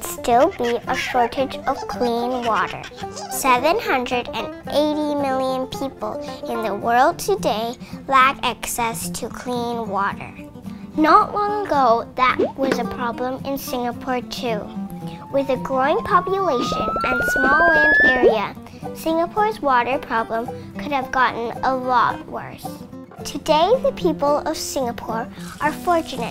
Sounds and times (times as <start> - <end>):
Speech: 0.0 - 10.4, 11.0 - 14.7, 15.4 - 26.3
Music: 0.0 - 26.3.